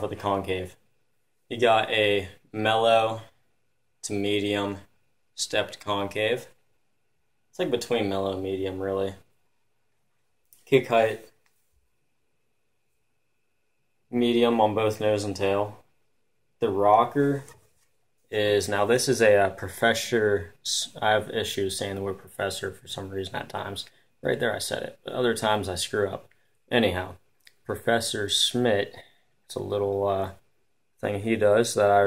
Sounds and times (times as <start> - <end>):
Speech: 0.0 - 0.8, 1.5 - 3.4, 4.0 - 6.6, 7.5 - 9.3, 10.6 - 11.4, 14.1 - 15.9, 16.6 - 17.6, 18.3 - 32.0.